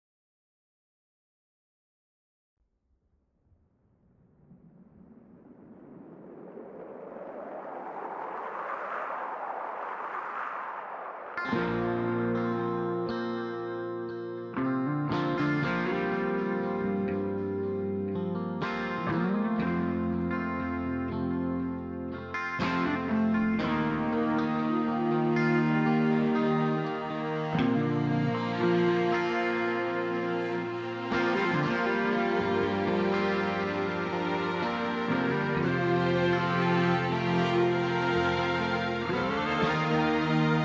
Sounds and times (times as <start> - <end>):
Music: 11.5 - 40.6.